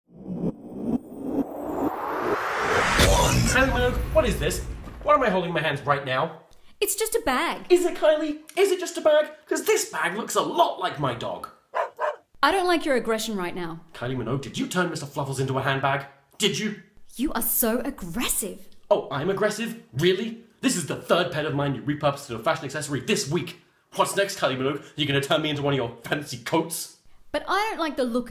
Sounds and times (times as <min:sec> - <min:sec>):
Speech: 0:03.0 - 0:11.6, 0:12.4 - 0:28.3.